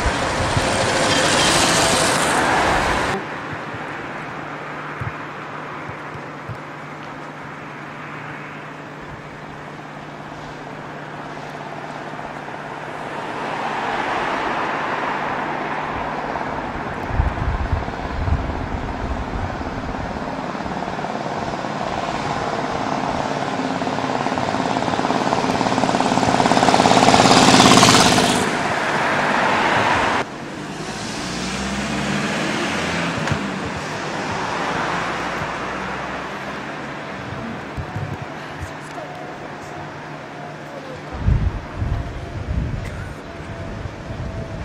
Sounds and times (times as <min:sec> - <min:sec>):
Car passing by: 0:00.0 - 0:03.4, 0:12.7 - 0:18.8, 0:20.8 - 0:37.6.